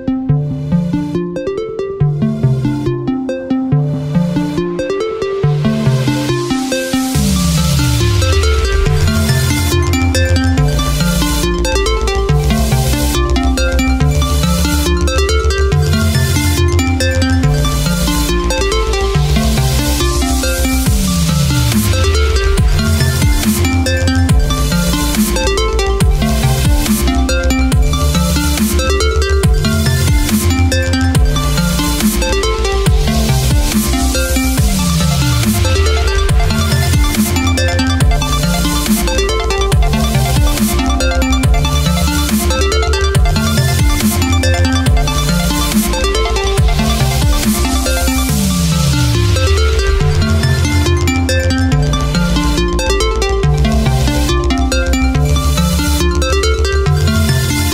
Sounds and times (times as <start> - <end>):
Electronic music: 0.0 - 57.7.